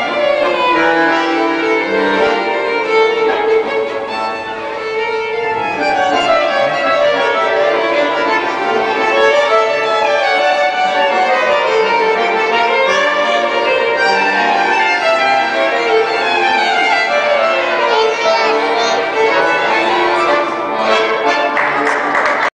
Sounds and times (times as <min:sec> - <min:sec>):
Violin, fiddle: 0:00.0 - 0:21.7.